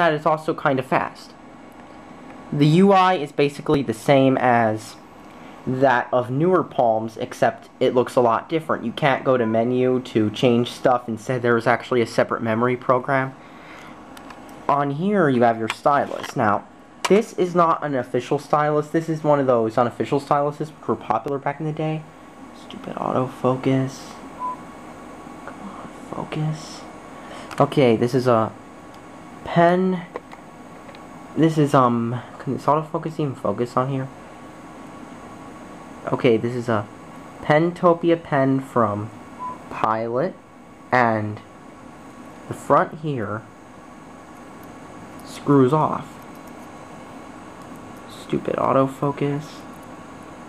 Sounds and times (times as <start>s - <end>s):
Speech: 0.0s - 1.4s, 2.5s - 5.0s, 5.7s - 13.4s, 14.7s - 24.3s, 25.5s - 26.9s, 27.5s - 28.6s, 29.4s - 30.2s, 31.4s - 34.2s, 36.0s - 41.5s, 42.5s - 43.5s, 45.2s - 46.2s, 48.1s - 49.7s.